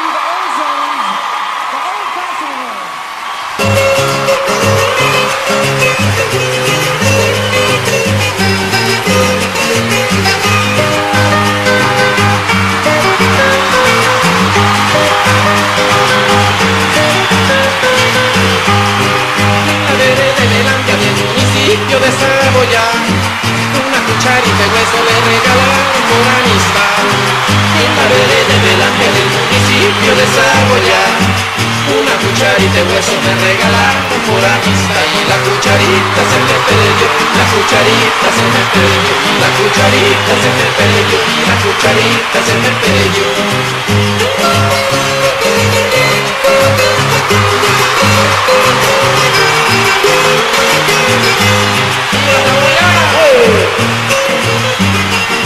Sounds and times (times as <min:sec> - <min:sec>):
Music: 0:03.0 - 0:55.4
Male singing: 0:19.8 - 0:23.1, 0:23.8 - 0:43.6, 0:52.2 - 0:53.8.